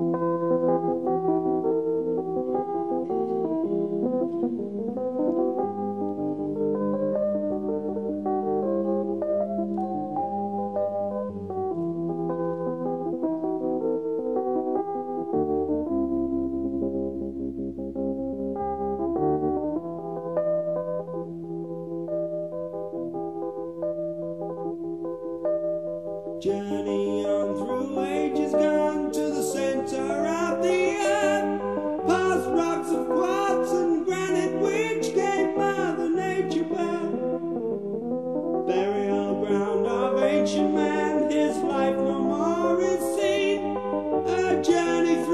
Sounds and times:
Music: 0.0s - 45.3s.

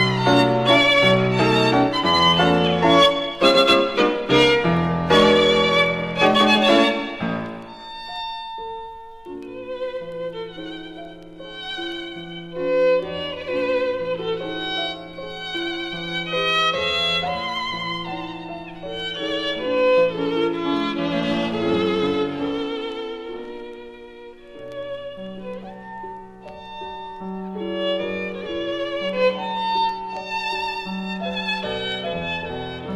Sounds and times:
Piano: 0.0s - 32.9s.

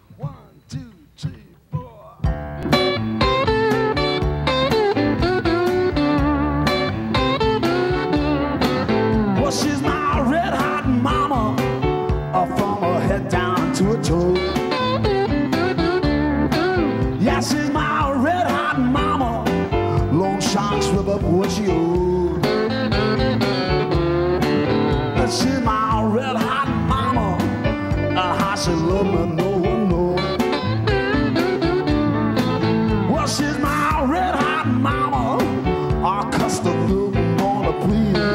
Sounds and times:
Music: 0.0s - 38.3s.

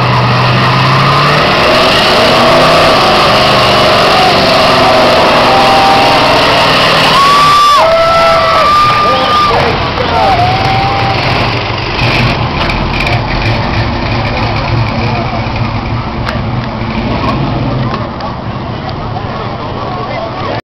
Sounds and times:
Car: 0.0s - 20.6s
Speech: 18.0s - 20.6s.

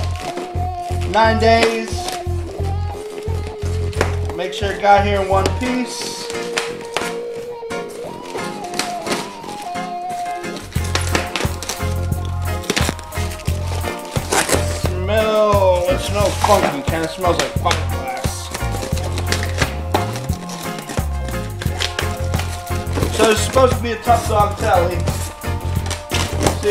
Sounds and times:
Music: 0.0s - 26.7s
Speech: 1.1s - 2.2s, 4.4s - 6.2s, 14.9s - 18.5s, 23.1s - 25.1s.

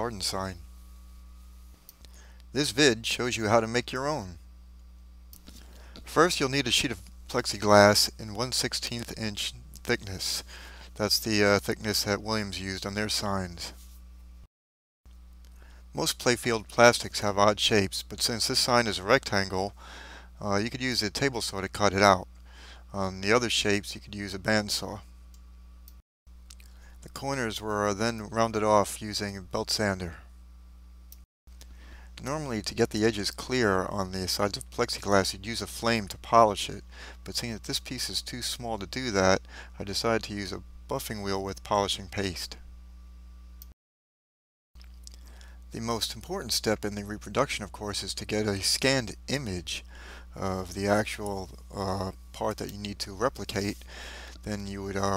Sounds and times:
Speech: 0.0s - 0.6s, 2.5s - 4.4s, 6.0s - 13.8s, 16.0s - 19.8s, 20.4s - 22.3s, 22.9s - 25.0s, 27.0s - 30.3s, 32.2s - 42.6s, 45.7s - 53.8s, 54.4s - 55.1s.

